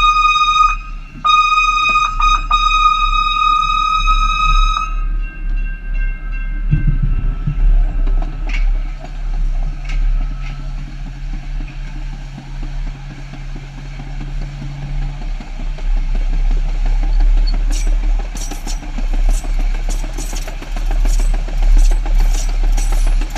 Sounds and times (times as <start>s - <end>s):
Vehicle horn, car horn, honking: 0.0s - 5.0s
Train: 0.0s - 23.3s.